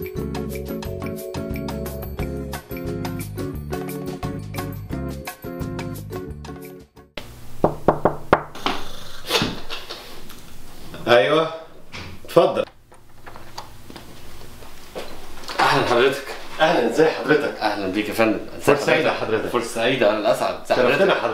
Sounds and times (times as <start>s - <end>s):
Music: 0.0s - 7.2s
Speech: 11.0s - 11.7s, 15.5s - 21.3s.